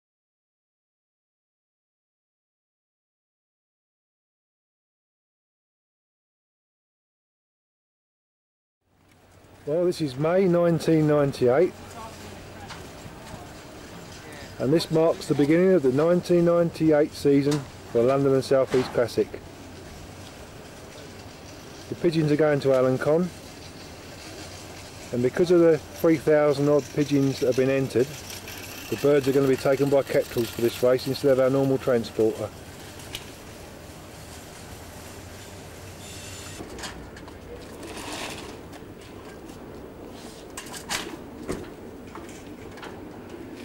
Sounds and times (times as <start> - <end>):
Speech: 9.6 - 13.6, 14.2 - 19.4, 21.9 - 23.4, 25.1 - 28.2, 28.9 - 32.5.